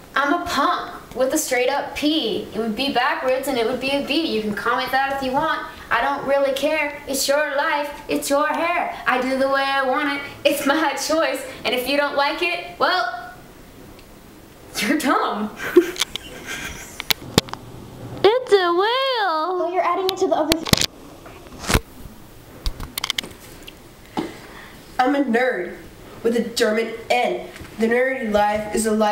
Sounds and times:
Inside, small room: 0:00.0 - 0:29.1
Speech: 0:00.2 - 0:13.4, 0:18.2 - 0:20.6, 0:25.0 - 0:29.1.

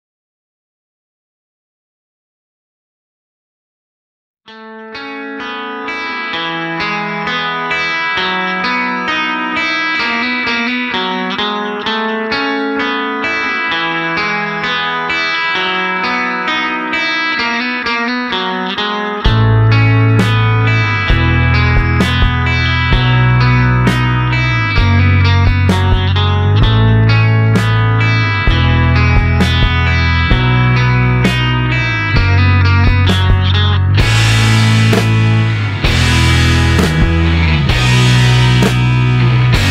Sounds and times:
Distortion: 0:04.5 - 0:39.7
Music: 0:04.5 - 0:39.7.

